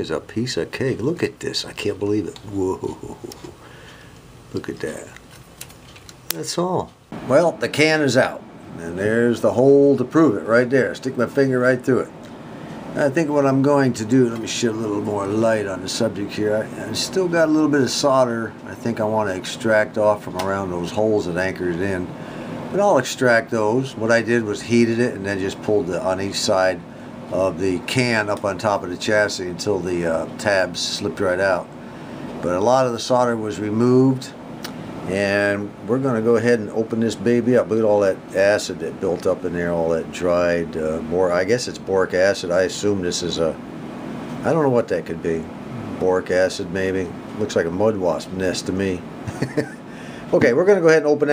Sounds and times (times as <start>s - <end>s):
Speech: 0.0s - 3.6s, 4.5s - 5.2s, 6.3s - 12.2s, 13.0s - 31.7s, 32.4s - 34.4s, 35.1s - 43.6s, 44.4s - 49.1s, 50.3s - 51.3s.